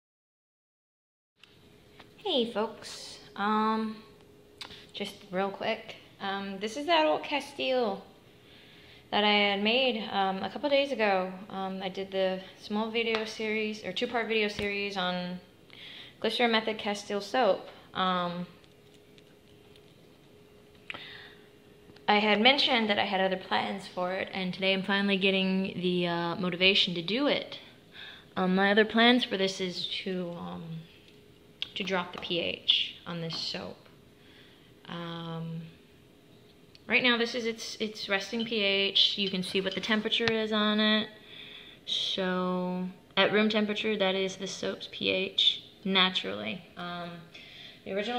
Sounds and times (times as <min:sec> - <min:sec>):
Speech: 0:02.2 - 0:04.2, 0:05.0 - 0:08.1, 0:09.1 - 0:15.5, 0:16.2 - 0:18.6, 0:22.1 - 0:27.7, 0:28.4 - 0:30.9, 0:31.6 - 0:33.9, 0:34.9 - 0:35.8, 0:36.9 - 0:41.2, 0:41.9 - 0:48.1.